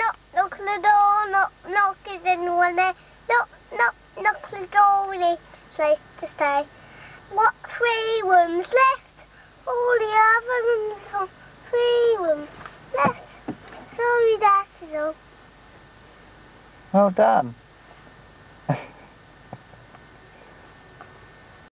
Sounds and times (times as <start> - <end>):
Speech: 17.0 - 17.6.